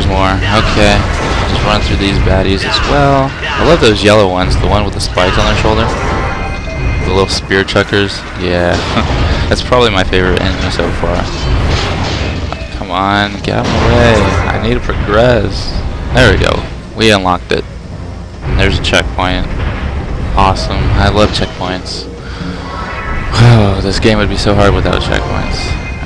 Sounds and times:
Speech: 0:00.0 - 0:05.9, 0:07.1 - 0:11.3, 0:12.6 - 0:17.6, 0:18.5 - 0:19.5, 0:20.4 - 0:22.1, 0:23.4 - 0:25.8.

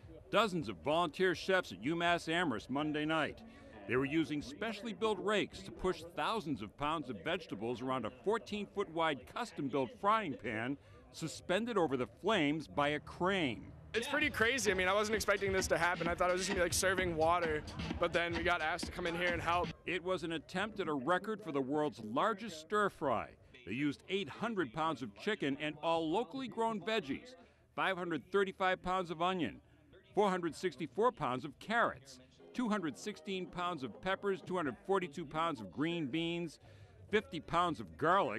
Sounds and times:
Speech: 0:00.0 - 0:38.3.

